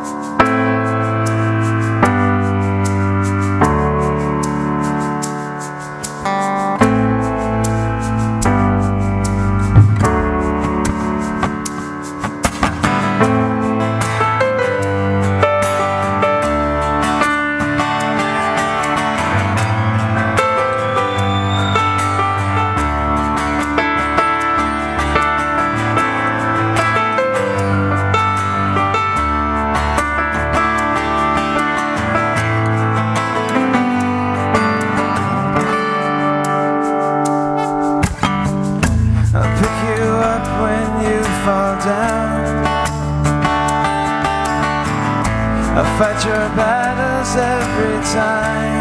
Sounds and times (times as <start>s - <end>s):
Music: 0.0s - 48.8s.